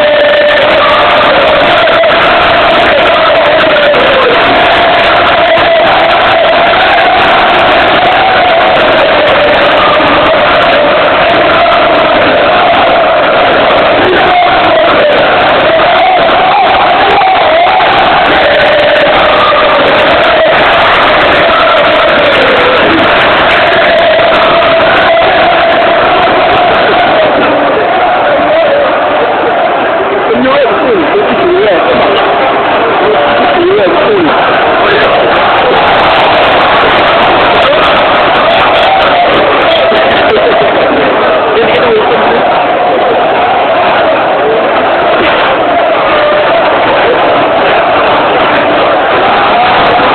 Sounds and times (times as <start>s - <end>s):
Speech: 30.1s - 35.2s, 37.6s - 42.9s.